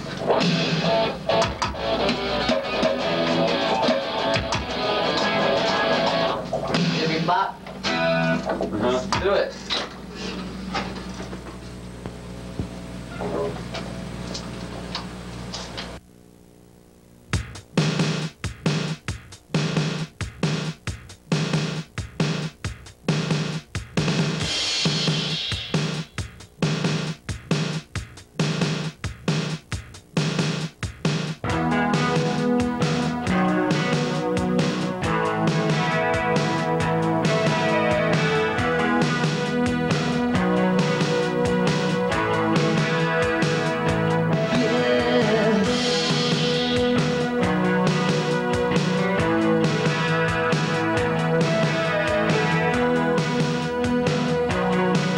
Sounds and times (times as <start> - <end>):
Music: 0.0 - 14.2, 17.2 - 55.1
Speech: 6.8 - 7.7, 8.5 - 9.9, 13.1 - 13.7.